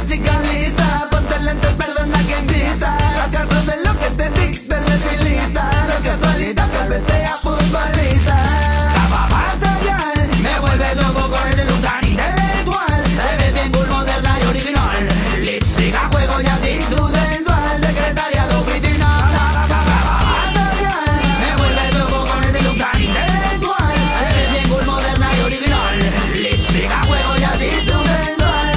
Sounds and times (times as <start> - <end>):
Reggae: 0.0 - 28.7.